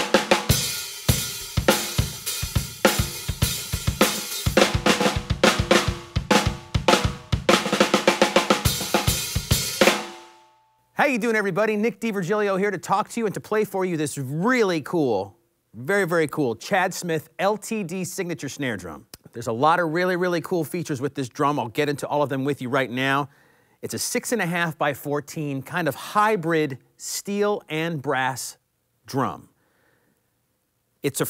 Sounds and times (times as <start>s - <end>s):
Speech: 11.0s - 29.6s, 31.0s - 31.3s.